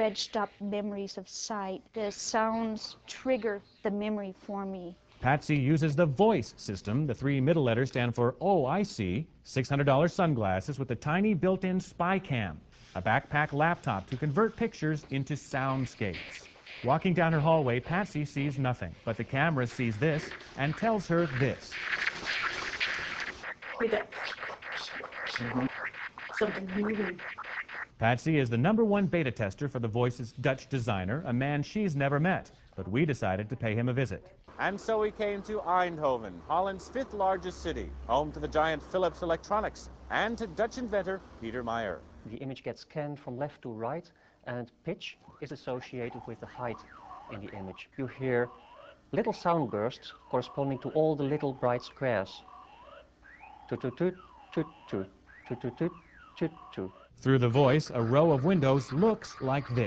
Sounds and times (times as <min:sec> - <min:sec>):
Speech: 0:00.0 - 0:21.8, 0:23.8 - 0:24.3, 0:25.4 - 0:25.7, 0:26.4 - 0:27.2, 0:28.0 - 0:48.6, 0:49.2 - 0:52.4, 0:53.7 - 0:59.8.